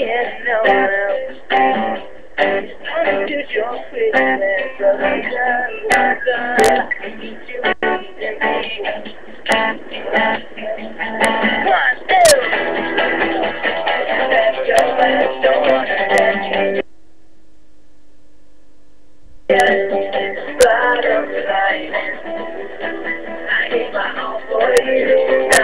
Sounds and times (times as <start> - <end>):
Male singing: 0.0 - 1.6, 2.8 - 9.2, 10.6 - 12.6, 14.1 - 16.7, 19.5 - 25.6
Music: 0.0 - 16.8, 19.5 - 25.6.